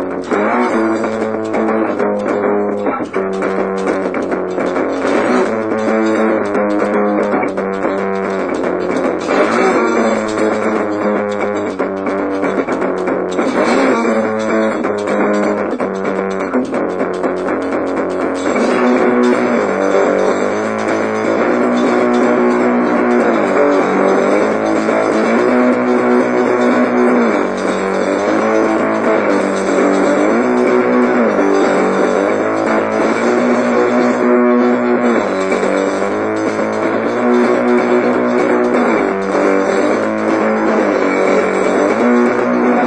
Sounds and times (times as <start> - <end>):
Guitar: 0.0 - 42.8.